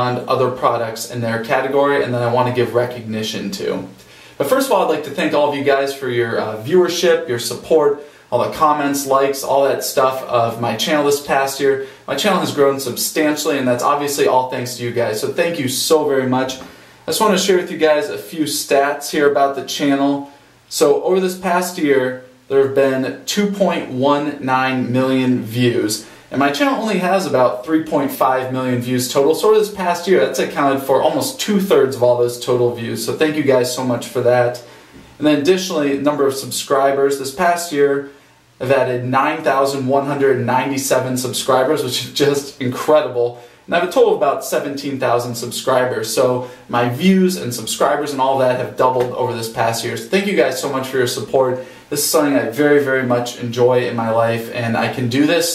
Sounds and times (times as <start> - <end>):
Speech: 0.0 - 55.5.